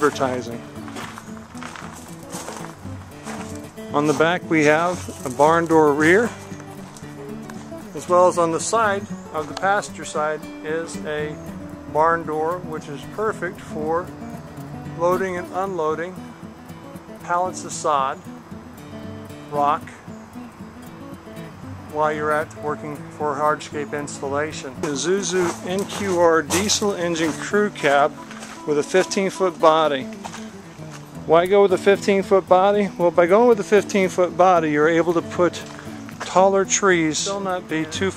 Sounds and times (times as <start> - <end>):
Speech: 0.0 - 0.6, 4.0 - 6.4, 8.0 - 14.1, 15.0 - 16.2, 17.2 - 18.2, 19.5 - 20.0, 21.9 - 30.1, 31.3 - 35.6, 36.2 - 38.1
Music: 0.0 - 38.1.